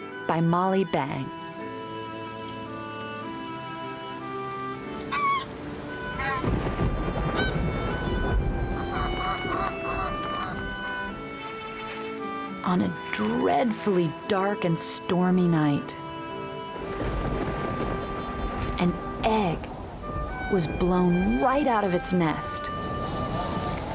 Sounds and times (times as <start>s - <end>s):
Music: 0.0s - 23.9s
Speech: 0.3s - 1.3s, 12.6s - 16.0s, 18.8s - 19.7s, 20.5s - 22.7s.